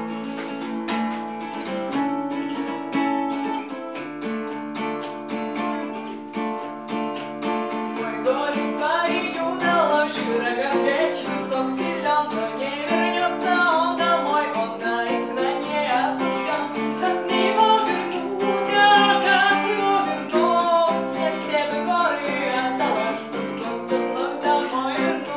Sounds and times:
Acoustic guitar: 0:00.0 - 0:25.3
Strum: 0:00.0 - 0:25.3.

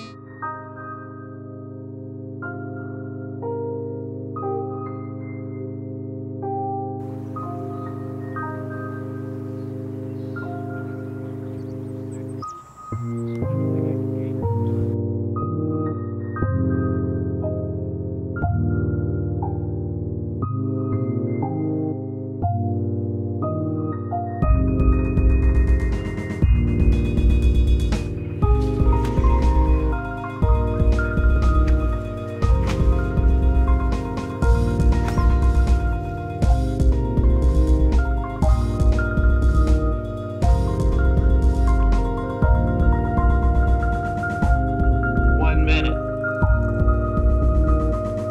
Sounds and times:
Music: 0:00.0 - 0:48.3.

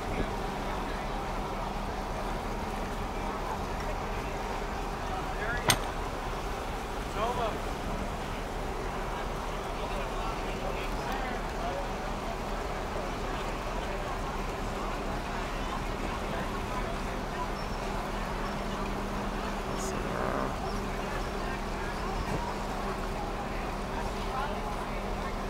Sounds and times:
Boat, Water vehicle: 0:00.0 - 0:25.4
Speech: 0:00.0 - 0:25.4.

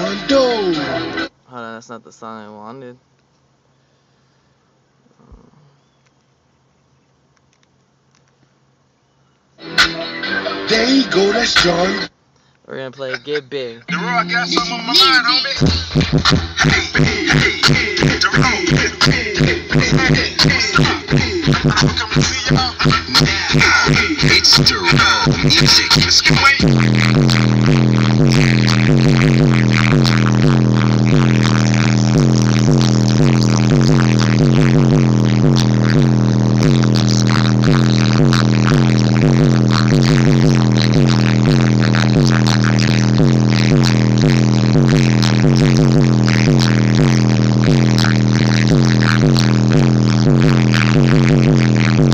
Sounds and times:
Music: 0:00.0 - 0:01.3, 0:09.6 - 0:12.1, 0:13.9 - 0:52.1
Speech: 0:00.0 - 0:03.0, 0:12.7 - 0:15.5.

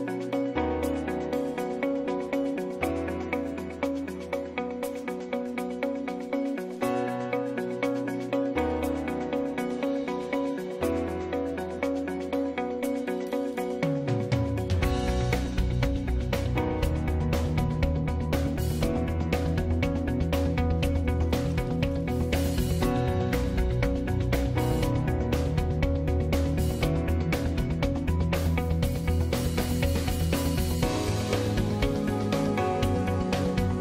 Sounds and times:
Music: 0:00.0 - 0:33.8.

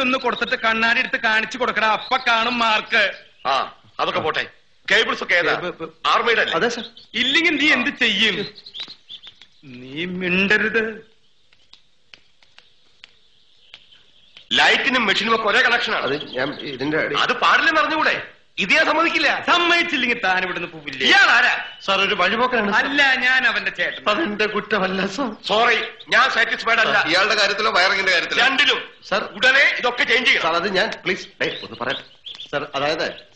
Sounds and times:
Speech: 0:00.0 - 0:08.6, 0:14.5 - 0:33.2.

